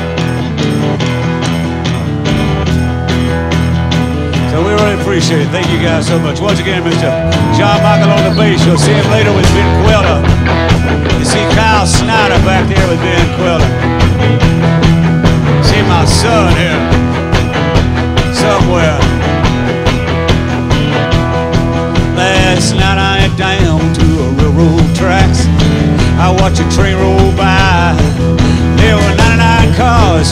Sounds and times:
Rock and roll: 0.0 - 30.3.

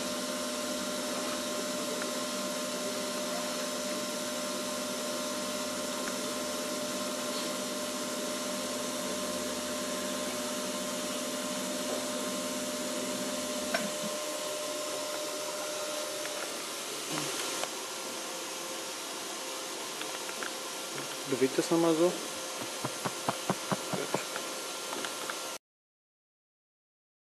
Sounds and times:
Speech: 21.2 - 22.3, 23.9 - 24.3.

